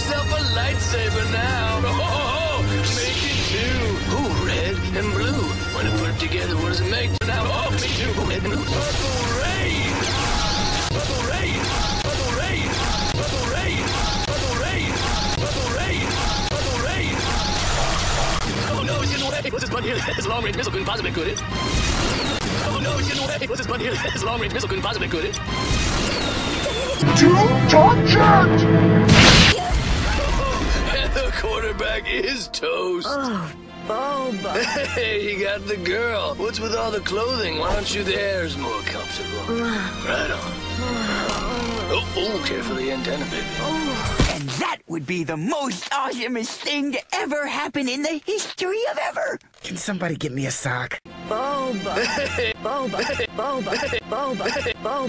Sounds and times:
Speech: 0.0s - 10.0s, 22.6s - 25.4s, 30.1s - 52.1s
Music: 0.0s - 44.3s, 51.1s - 55.0s.

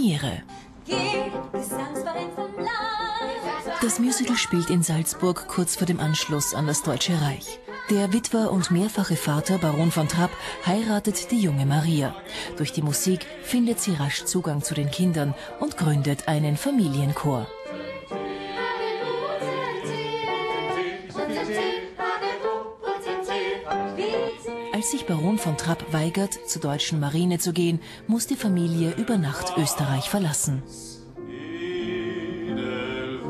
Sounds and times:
Speech: 3.8s - 17.5s, 24.8s - 31.0s.

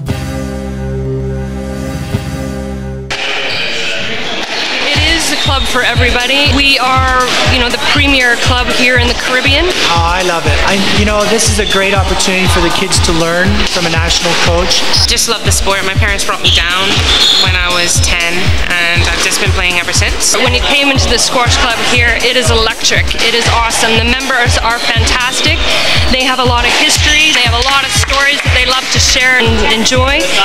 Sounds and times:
Music: 0.0s - 30.4s
Speech: 4.9s - 30.4s.

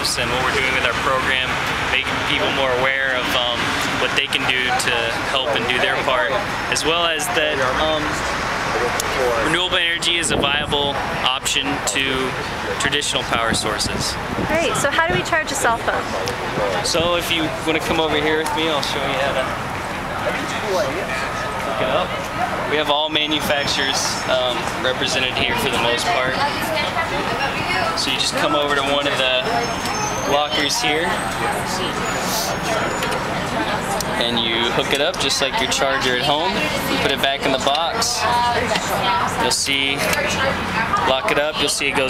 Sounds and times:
Speech: 0.0s - 19.6s, 20.2s - 42.0s.

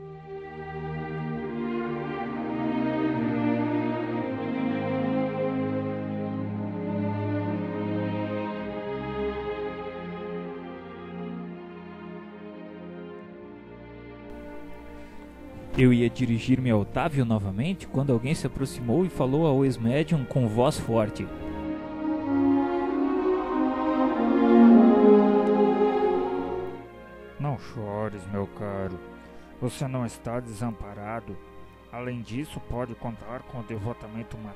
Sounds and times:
Music: 0.0s - 34.5s
Speech: 15.7s - 21.4s, 27.4s - 29.0s, 29.6s - 34.5s.

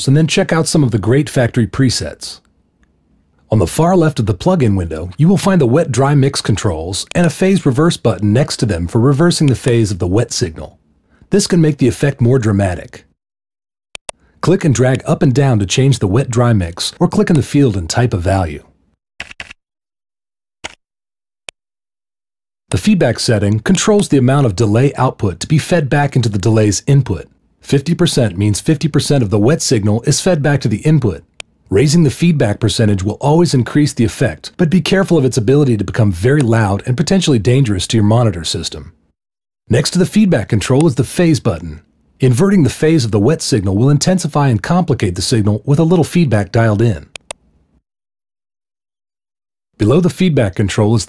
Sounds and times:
Speech: 0.0s - 2.5s, 3.5s - 13.2s, 14.4s - 18.8s, 22.7s - 39.0s, 39.7s - 47.2s, 49.8s - 51.0s.

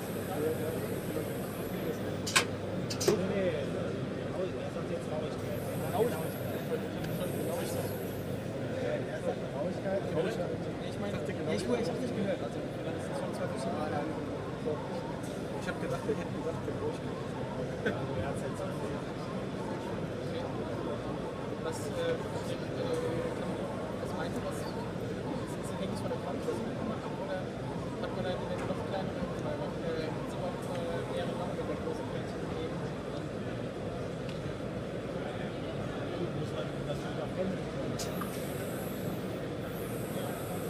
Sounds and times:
Speech: 0.0s - 40.6s.

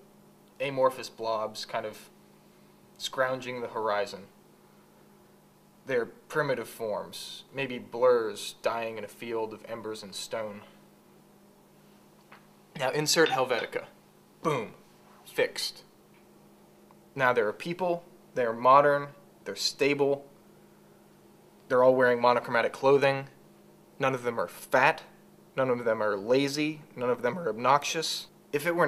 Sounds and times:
Inside, small room: 0.0s - 28.8s
Speech: 0.6s - 2.2s, 3.0s - 4.4s, 5.9s - 10.8s, 12.8s - 15.9s, 17.2s - 20.3s, 21.7s - 23.4s, 24.0s - 28.8s.

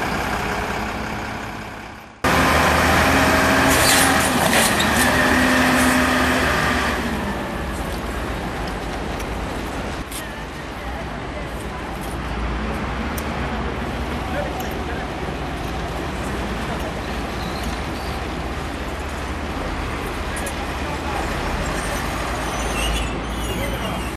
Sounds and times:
Vehicle: 0.0s - 24.1s.

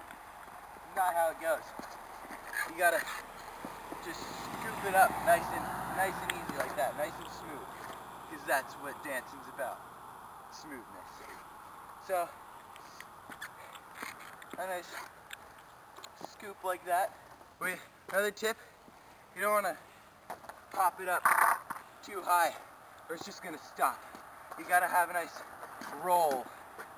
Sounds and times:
Speech: 0.9s - 1.8s, 2.6s - 3.2s, 4.0s - 7.7s, 8.3s - 9.8s, 10.6s - 11.4s, 12.0s - 12.4s, 14.6s - 15.0s, 16.2s - 18.6s, 19.4s - 19.8s, 20.8s - 21.3s, 22.0s - 24.0s, 24.6s - 26.5s
Skateboard: 21.2s - 21.8s.

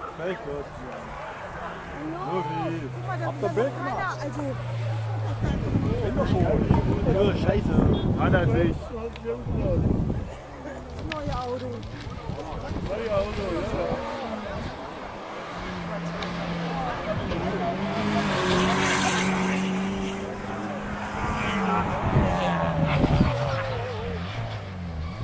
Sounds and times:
Race car, auto racing: 0.0s - 25.2s.

